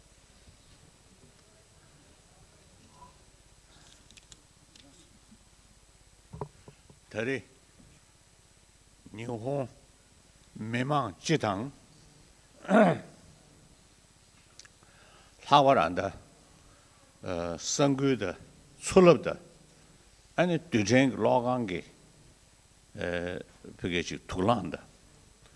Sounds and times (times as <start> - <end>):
Narration, monologue: 6.4 - 7.8, 8.7 - 16.4, 17.2 - 25.5
Male speech, man speaking: 7.1 - 7.5, 9.1 - 9.8, 10.6 - 11.8, 12.6 - 13.2, 15.4 - 16.2, 17.2 - 19.4, 20.4 - 21.9, 23.0 - 24.9.